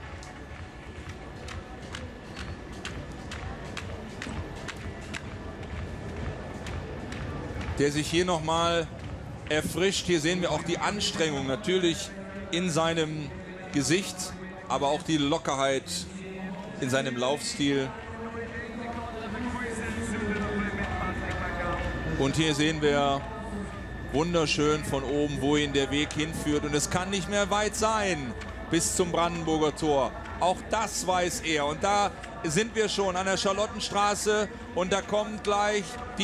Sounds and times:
Speech: 7.7s - 36.2s.

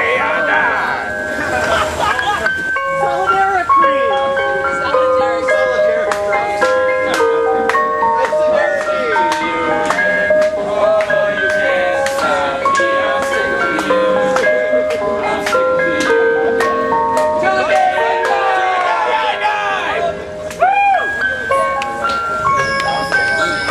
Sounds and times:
Music: 0.0s - 23.7s
Speech: 21.3s - 23.7s.

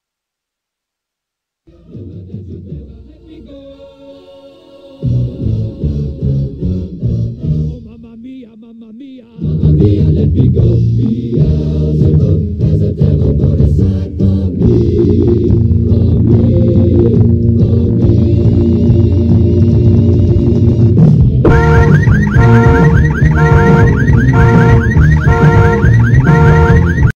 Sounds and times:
Music: 1.7s - 8.4s, 9.2s - 27.1s.

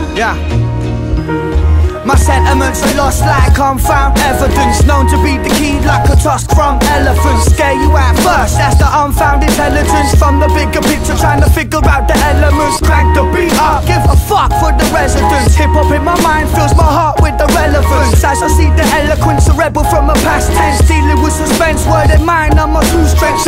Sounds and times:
Music: 0.0s - 23.4s.

